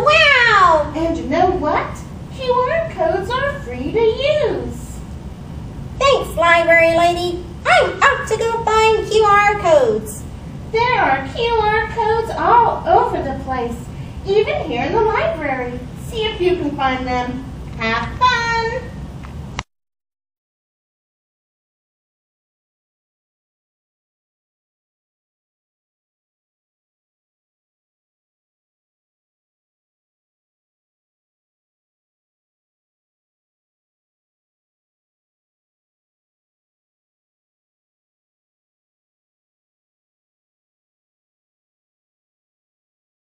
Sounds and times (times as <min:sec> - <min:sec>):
Speech: 0:00.0 - 0:05.0, 0:06.0 - 0:19.0.